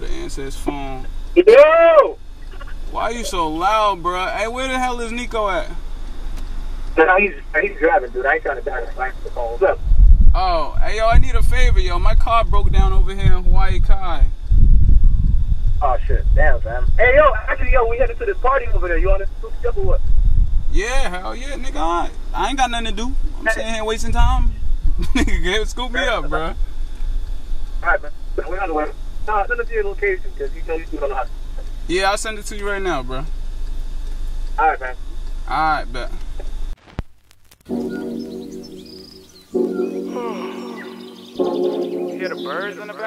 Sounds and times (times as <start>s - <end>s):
Speech: 0.0s - 5.8s, 7.0s - 9.8s, 10.4s - 14.3s, 20.8s - 24.6s, 25.2s - 26.6s, 27.8s - 31.3s, 31.9s - 33.3s, 42.2s - 43.0s.